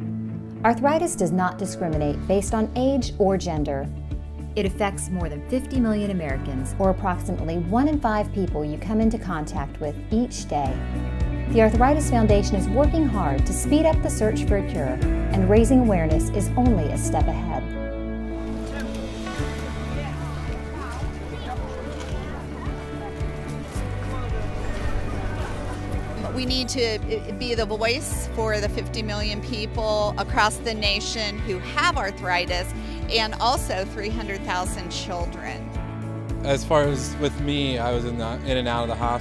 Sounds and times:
Music: 0.0 - 39.2
Walk, footsteps: 18.8 - 26.2.

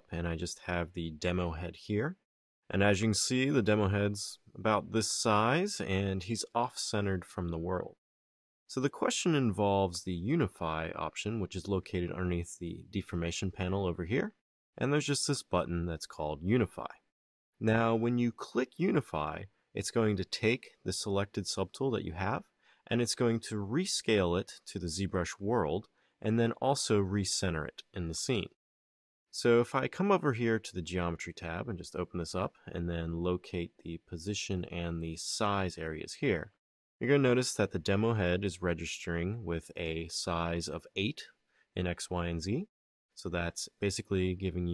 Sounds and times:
Speech: 0.0 - 8.0, 8.7 - 28.6, 29.3 - 44.7.

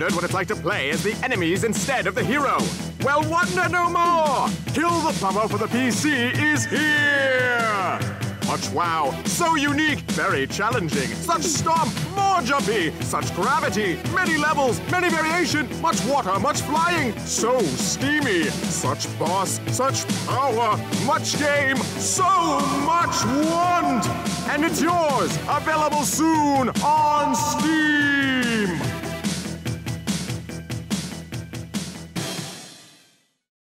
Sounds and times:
Speech: 0.0 - 28.9
Music: 0.0 - 33.5.

